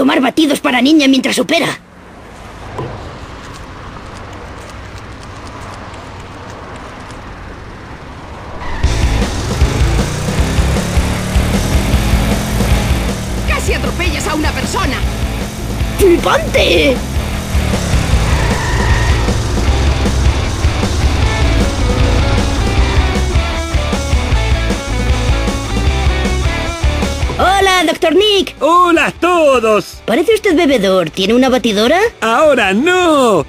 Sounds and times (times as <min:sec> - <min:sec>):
Speech: 0:00.0 - 0:01.8, 0:13.5 - 0:15.1, 0:16.0 - 0:17.0, 0:27.4 - 0:33.4
Music: 0:08.8 - 0:33.4.